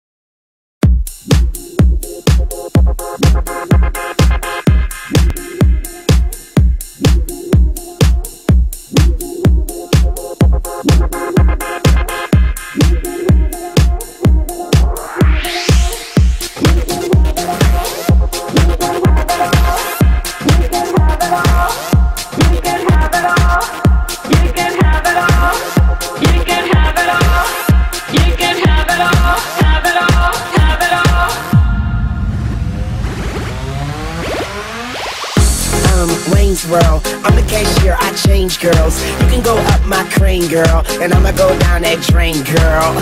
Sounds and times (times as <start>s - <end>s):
Music: 0.8s - 43.0s.